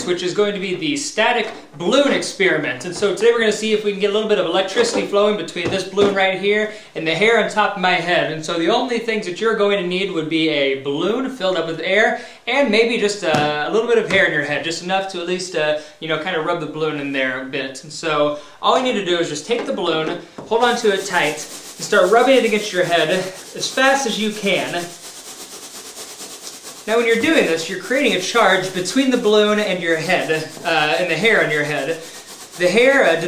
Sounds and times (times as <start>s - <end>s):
Speech: 0.0s - 24.9s, 26.9s - 33.2s.